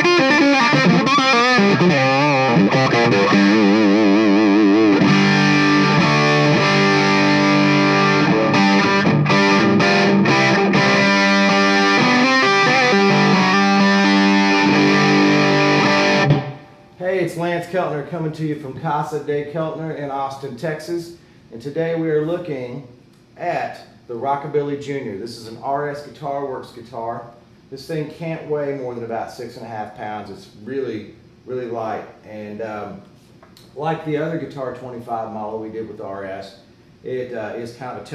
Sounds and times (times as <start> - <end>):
Strum: 0.0 - 16.8
Electric guitar: 0.0 - 17.0.